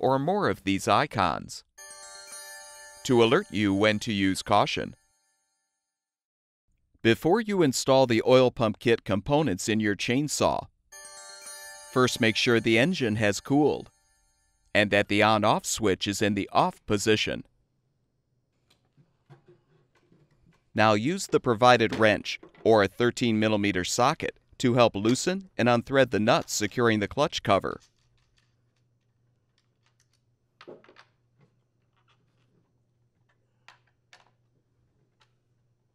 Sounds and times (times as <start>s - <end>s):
Speech: 0.0s - 1.7s, 3.1s - 5.0s, 7.1s - 10.7s, 12.0s - 13.9s, 14.8s - 17.5s, 20.8s - 27.8s.